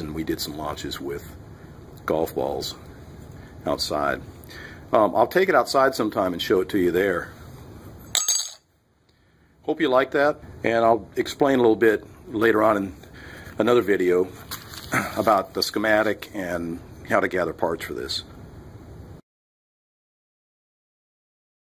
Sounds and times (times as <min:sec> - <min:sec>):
Speech: 0:00.0 - 0:01.4, 0:02.0 - 0:02.9, 0:03.6 - 0:04.3, 0:04.9 - 0:07.4, 0:09.6 - 0:13.0, 0:13.6 - 0:14.4, 0:15.0 - 0:18.3
Inside, small room: 0:00.0 - 0:19.2.